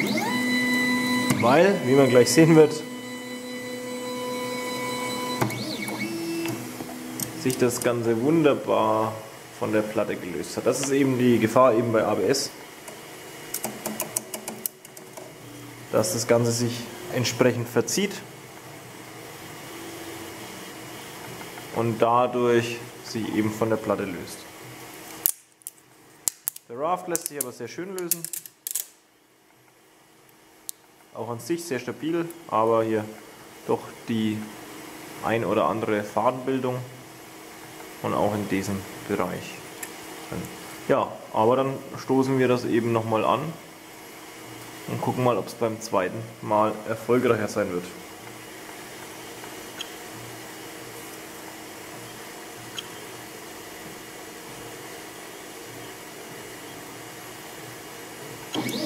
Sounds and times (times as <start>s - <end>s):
Speech: 1.4s - 2.9s, 7.4s - 12.6s, 15.9s - 18.3s, 21.7s - 24.5s, 26.7s - 28.3s, 31.2s - 34.6s, 35.2s - 37.0s, 38.0s - 39.7s, 40.3s - 43.6s, 44.9s - 48.0s.